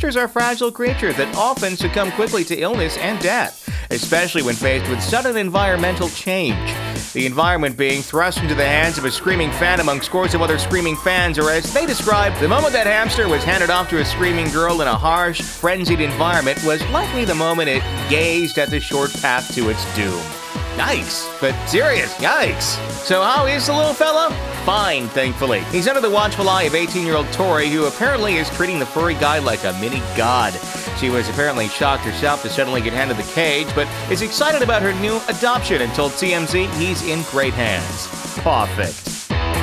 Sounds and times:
Speech: 0:00.0 - 0:39.0
Music: 0:00.0 - 0:39.6.

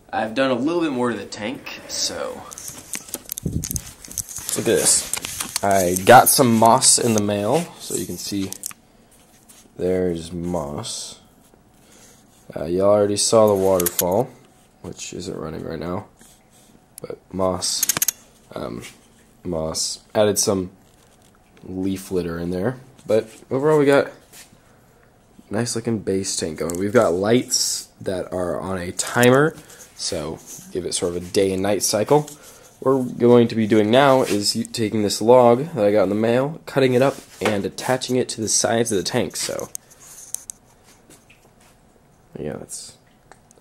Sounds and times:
Inside, small room: 0:00.0 - 0:43.6
Speech: 0:00.1 - 0:02.7, 0:04.5 - 0:08.6, 0:09.8 - 0:11.3, 0:12.5 - 0:16.1, 0:17.0 - 0:20.8, 0:21.6 - 0:24.2, 0:25.5 - 0:39.8, 0:42.4 - 0:43.0.

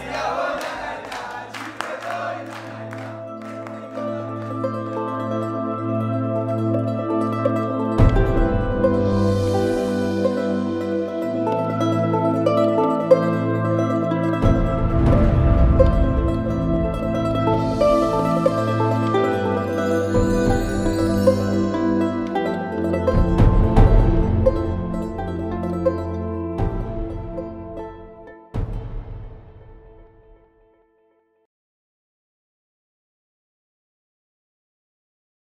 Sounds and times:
Background music: 0:00.0 - 0:31.1.

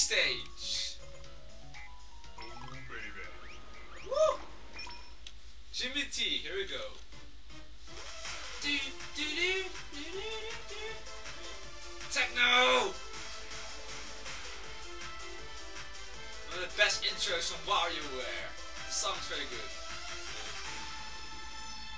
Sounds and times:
Speech: 0:00.0 - 0:01.0, 0:05.8 - 0:07.0, 0:08.6 - 0:11.0, 0:12.1 - 0:13.0, 0:16.5 - 0:19.7
Music: 0:00.0 - 0:05.1, 0:06.3 - 0:21.9.

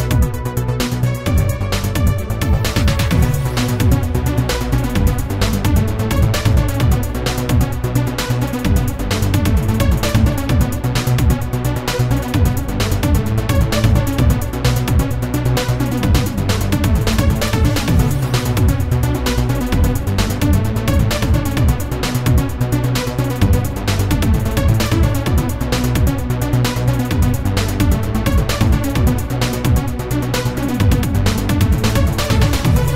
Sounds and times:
Music: 0:00.0 - 0:32.9.

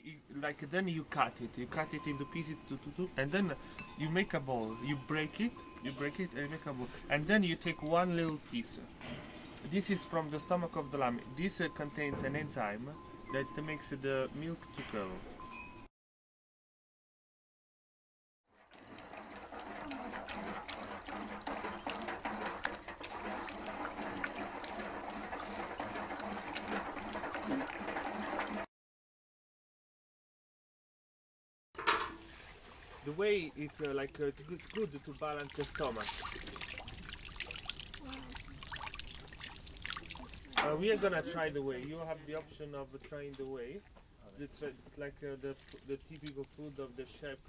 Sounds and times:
Speech: 0:00.0 - 0:08.9, 0:09.7 - 0:15.2, 0:33.0 - 0:36.1, 0:40.6 - 0:47.4
Liquid: 0:18.5 - 0:28.7, 0:32.1 - 0:41.3, 0:45.3 - 0:46.9.

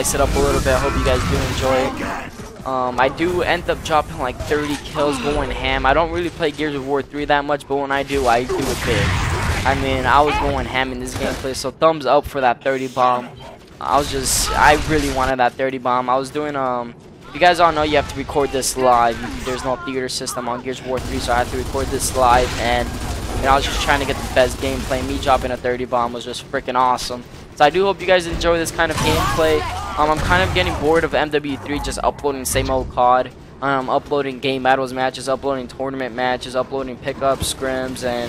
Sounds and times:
Speech: 0:00.0 - 0:38.2.

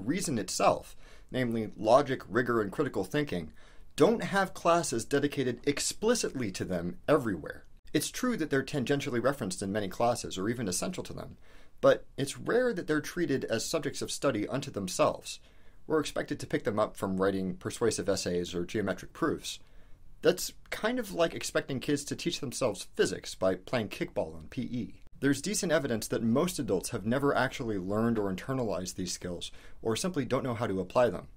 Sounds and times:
Speech: 0:00.0 - 0:19.6, 0:20.2 - 0:31.3.

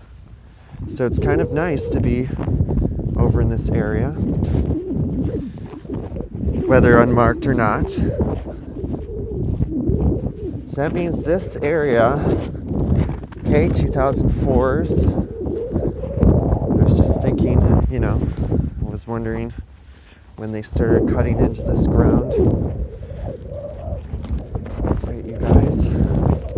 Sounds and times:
Outside, rural or natural: 0:00.0 - 0:26.5
Speech: 0:00.9 - 0:02.4, 0:03.2 - 0:04.2, 0:06.7 - 0:08.1, 0:10.7 - 0:12.4, 0:13.4 - 0:15.1, 0:16.8 - 0:19.6, 0:20.4 - 0:22.5, 0:25.0 - 0:26.1.

